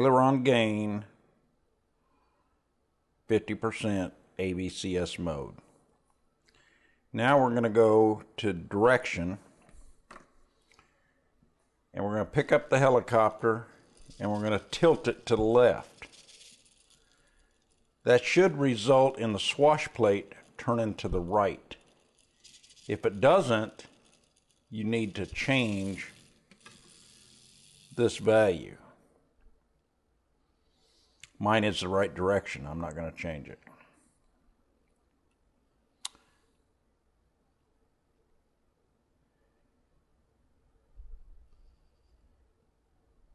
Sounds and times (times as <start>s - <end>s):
Speech: 0.0s - 1.2s, 3.3s - 5.6s, 7.1s - 9.5s, 12.0s - 16.1s, 18.1s - 21.8s, 22.9s - 23.9s, 24.7s - 26.2s, 27.9s - 29.0s, 31.3s - 33.8s
Inside, small room: 0.0s - 43.3s.